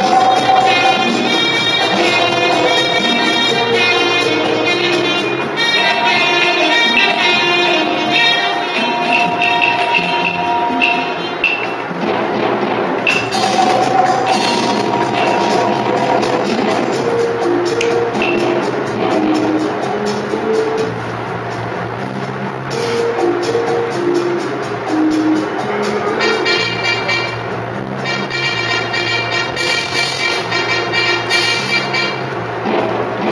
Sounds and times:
Music: 0.0s - 33.3s.

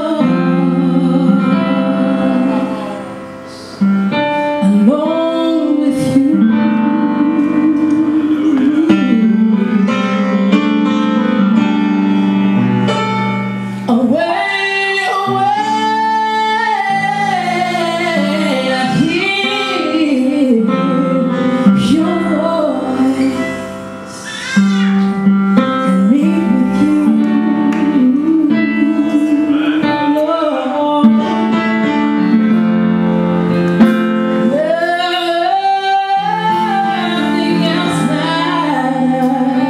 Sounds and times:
Music: 0.0s - 39.6s.

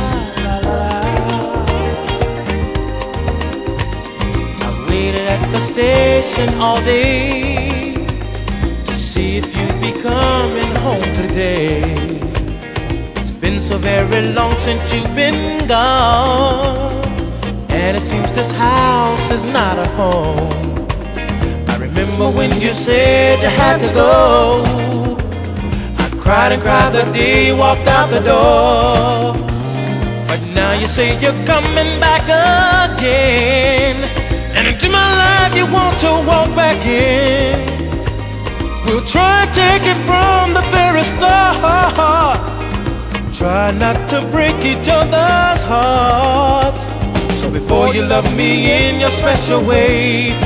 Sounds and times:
Music: 0.0s - 50.4s.

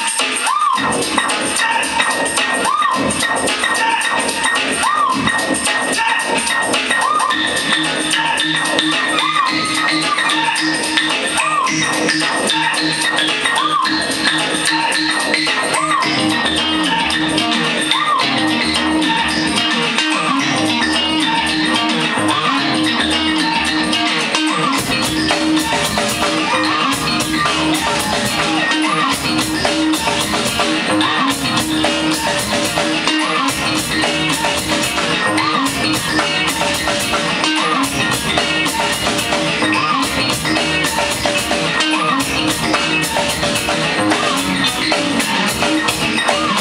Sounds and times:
Music: 0.0s - 46.6s.

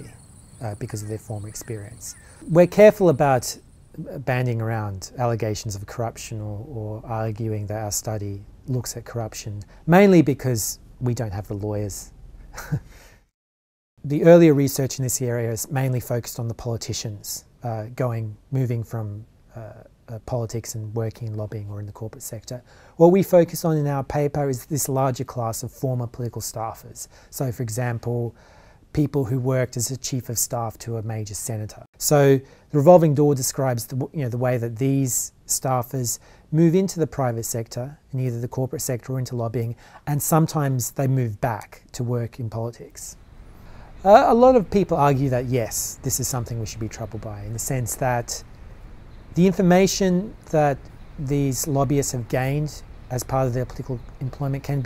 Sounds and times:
Speech: 0.0s - 12.1s, 14.0s - 43.2s, 44.0s - 48.5s, 49.4s - 54.8s.

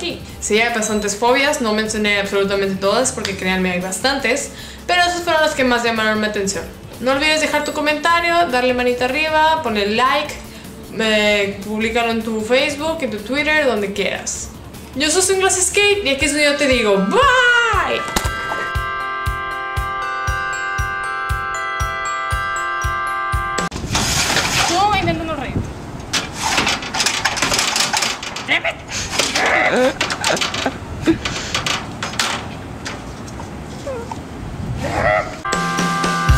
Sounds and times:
Speech: 0.0s - 18.0s, 24.6s - 25.6s.

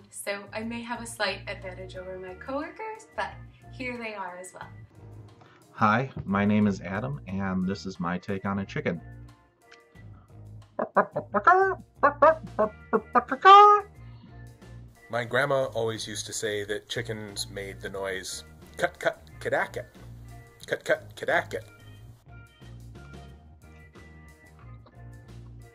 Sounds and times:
Speech: 5.8s - 9.0s, 15.1s - 19.9s, 20.6s - 21.7s.

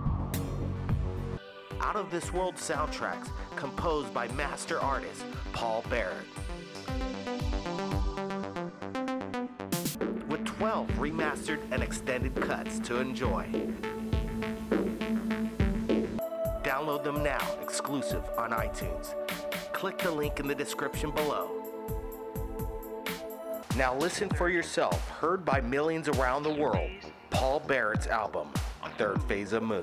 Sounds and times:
Music: 0.0s - 29.8s
Speech: 1.8s - 7.0s, 10.2s - 13.6s, 16.6s - 21.6s, 23.7s - 29.8s.

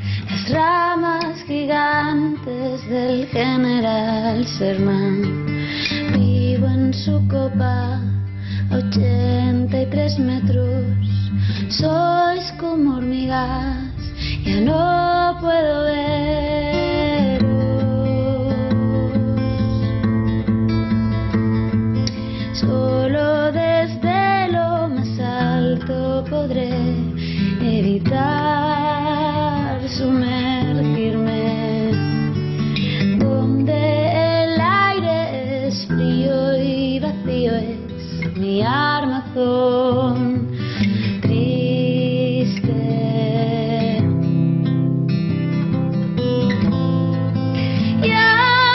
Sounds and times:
Music: 0.0s - 48.7s.

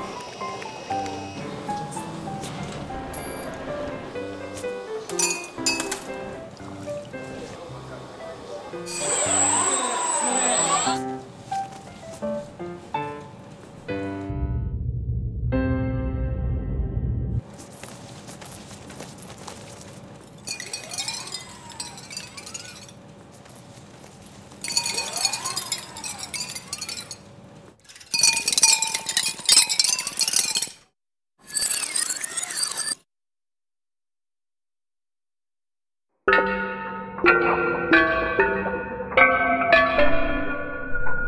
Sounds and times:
Music: 0.0s - 17.4s, 36.3s - 41.2s.

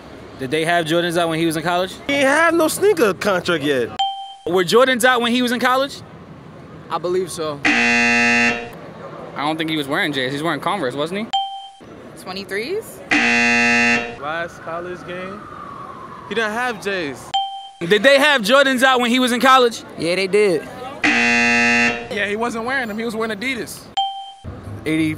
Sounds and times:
Outside, urban or manmade: 0.0s - 25.1s.

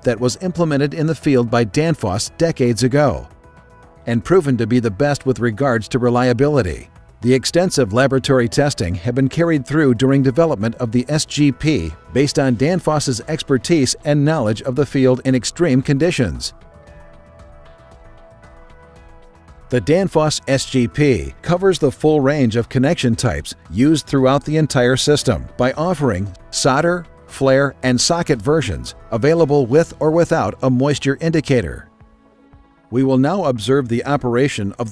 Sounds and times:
Speech: 0.0s - 3.3s, 4.1s - 16.6s, 19.7s - 31.9s, 33.0s - 34.9s
Music: 0.0s - 34.9s.

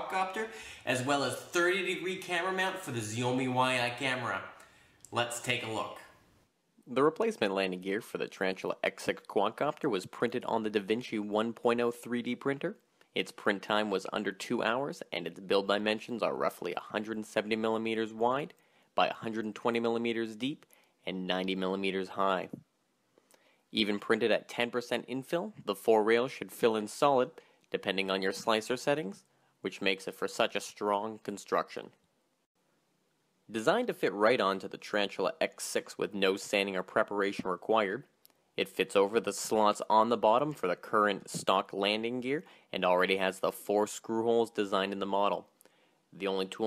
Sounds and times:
Speech: 0.0s - 6.2s, 6.9s - 22.7s, 23.7s - 32.0s, 33.5s - 45.5s, 46.2s - 46.6s.

